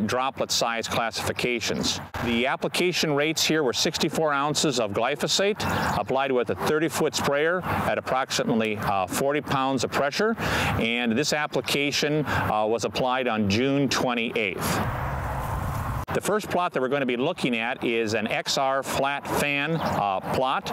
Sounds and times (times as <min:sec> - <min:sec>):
Speech: 0:00.0 - 0:14.8, 0:16.1 - 0:20.7.